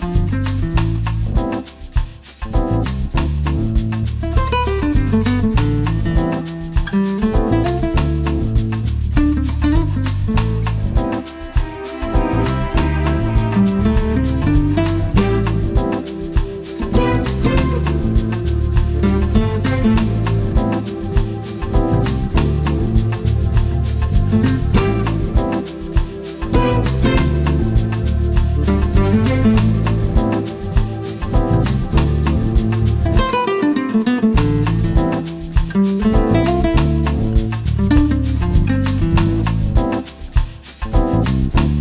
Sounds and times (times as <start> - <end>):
Music: 0.0 - 41.8.